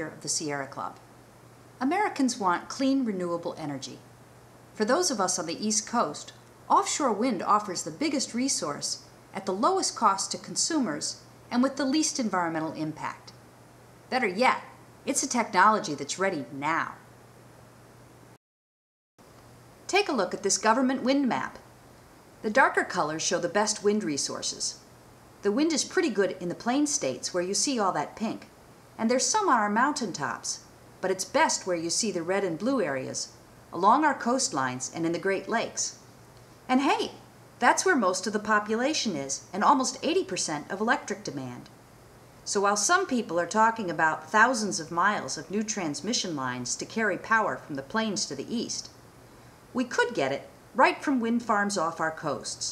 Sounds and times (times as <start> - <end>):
Speech: 0.0 - 1.0, 1.8 - 4.1, 4.8 - 13.4, 14.1 - 17.0, 19.9 - 21.7, 22.4 - 24.8, 25.4 - 36.0, 36.7 - 41.7, 42.5 - 49.0, 49.8 - 52.7.